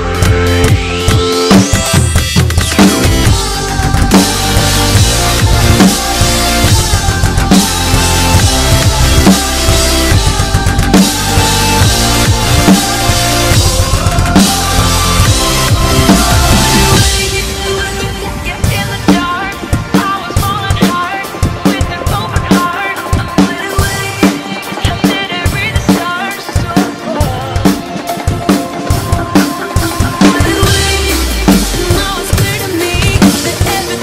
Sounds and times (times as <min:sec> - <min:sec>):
Bass drum: 0:00.0 - 0:17.5
Drum kit: 0:00.0 - 0:34.0.